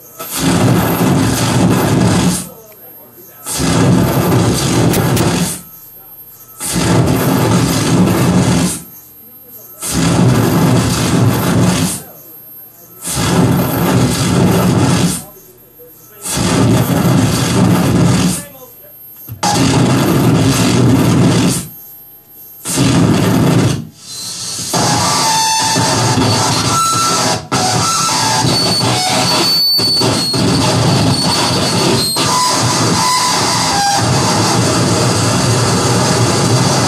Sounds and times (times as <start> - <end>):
Cacophony: 0.0 - 36.8.